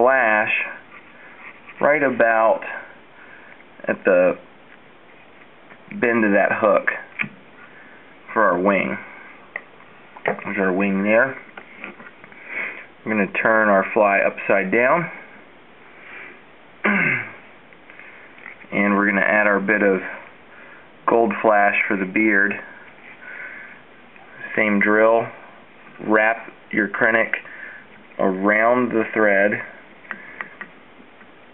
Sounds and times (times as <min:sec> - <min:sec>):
Speech: 0:00.0 - 0:00.8, 0:01.8 - 0:02.9, 0:03.8 - 0:04.4, 0:05.9 - 0:07.2, 0:08.3 - 0:09.1, 0:10.3 - 0:11.5, 0:13.0 - 0:15.2, 0:18.7 - 0:20.3, 0:21.0 - 0:22.8, 0:24.4 - 0:25.4, 0:26.0 - 0:27.4, 0:28.2 - 0:29.8.